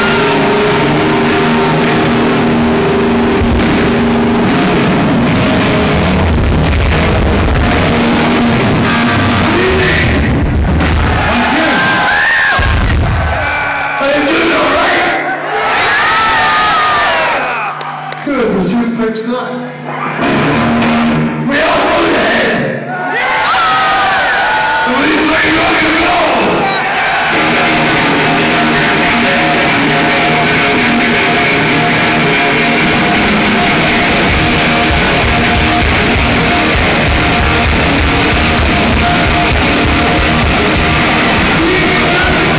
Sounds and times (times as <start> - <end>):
Rock and roll: 0.0 - 18.2, 19.9 - 42.5
Speech: 18.2 - 19.8, 24.9 - 26.6.